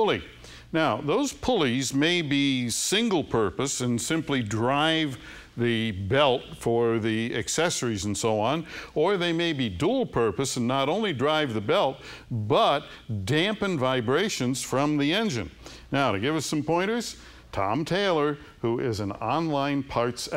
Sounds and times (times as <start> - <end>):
Speech: 0.0 - 20.3.